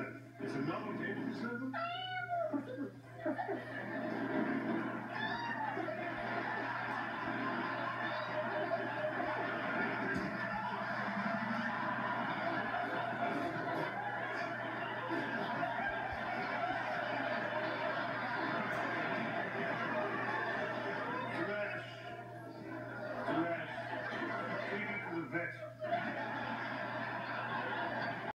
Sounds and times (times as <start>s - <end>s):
Speech: 24.5s - 25.8s.